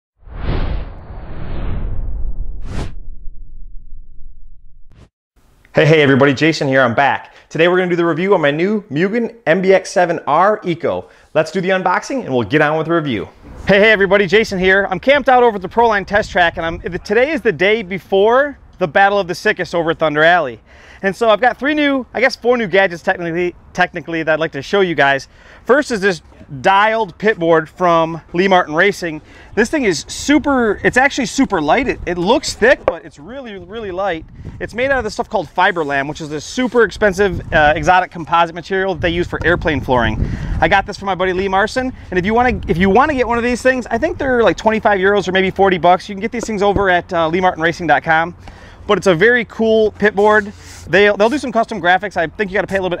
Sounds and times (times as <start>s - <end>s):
Speech: 5.8s - 53.0s.